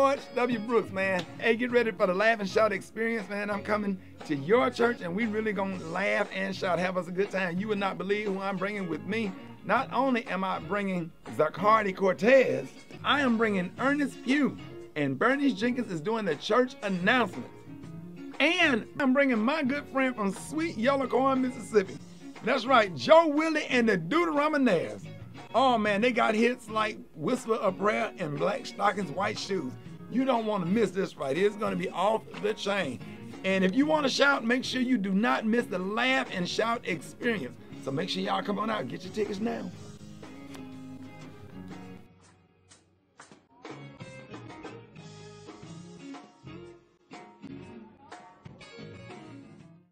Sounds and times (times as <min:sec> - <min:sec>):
Speech: 0:00.0 - 0:17.5, 0:18.4 - 0:39.8
Music: 0:00.0 - 0:49.9.